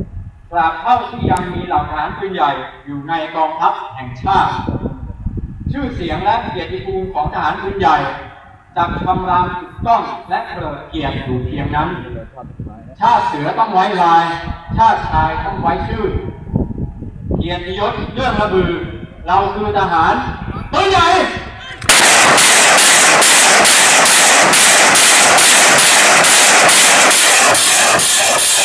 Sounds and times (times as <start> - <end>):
Artillery fire: 21.8 - 28.6.